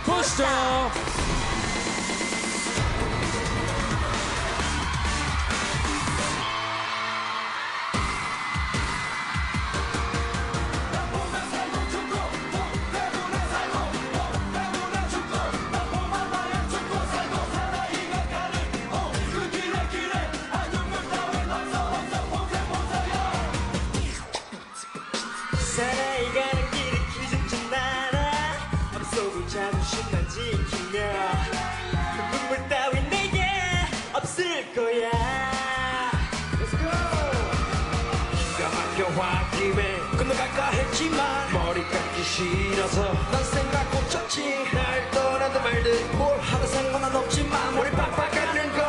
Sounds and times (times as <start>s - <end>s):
Music: 0.0s - 48.8s.